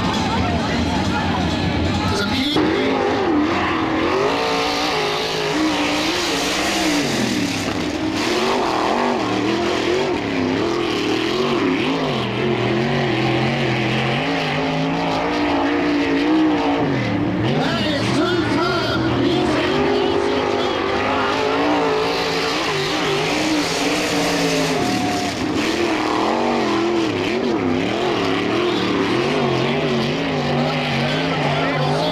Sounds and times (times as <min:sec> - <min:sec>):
Car: 0:00.0 - 0:32.1.